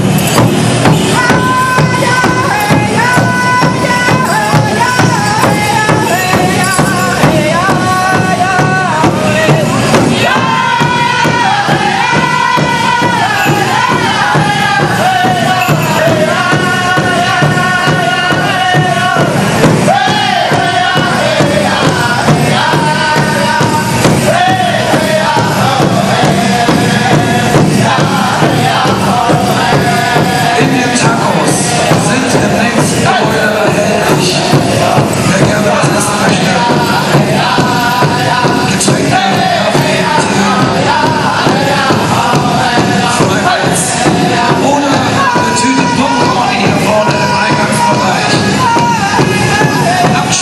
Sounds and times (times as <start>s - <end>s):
Music: 0.0s - 50.4s.